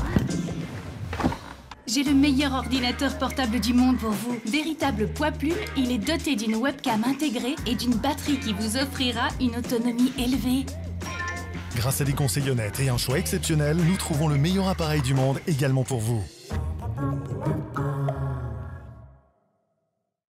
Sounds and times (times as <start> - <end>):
Music: 0.0 - 19.4
Speech: 11.8 - 16.4.